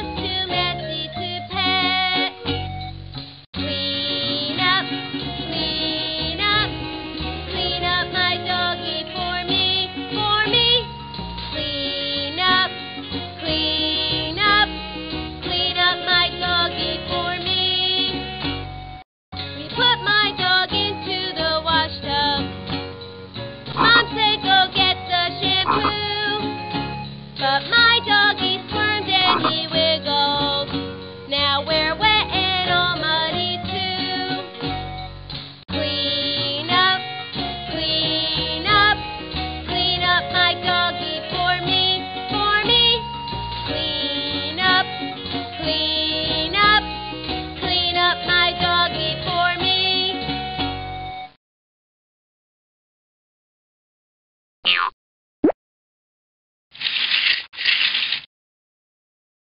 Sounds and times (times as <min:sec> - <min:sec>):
Music: 0:00.0 - 0:51.4.